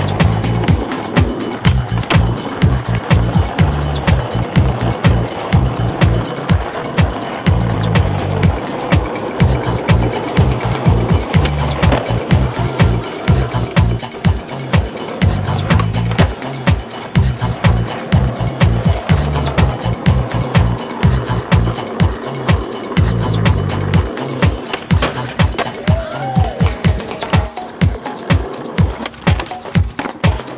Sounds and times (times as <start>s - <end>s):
Music: 0.0s - 30.5s
Skateboard: 0.0s - 30.5s.